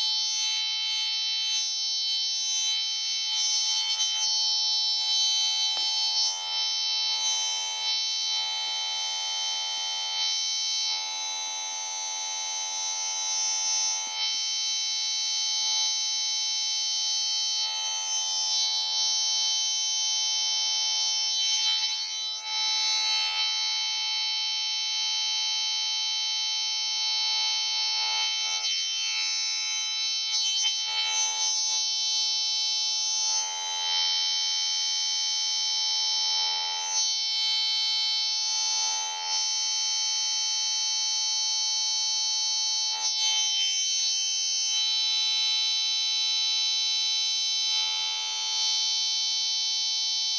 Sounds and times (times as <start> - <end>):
Siren: 0.0 - 12.2, 17.4 - 39.5.